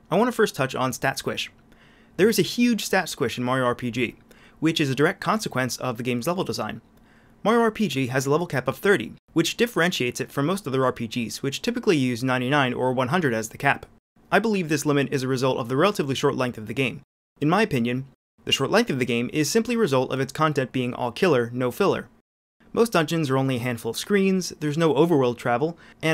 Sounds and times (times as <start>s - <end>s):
Speech: 0.0s - 1.6s, 2.2s - 6.8s, 7.4s - 26.1s.